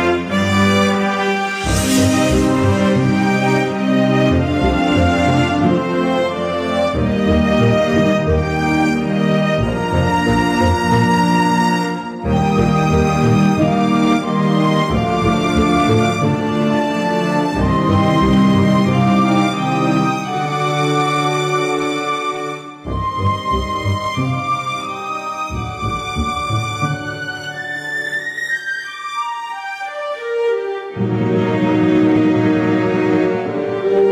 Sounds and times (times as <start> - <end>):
Theme music: 0.0 - 28.9, 29.5 - 34.1.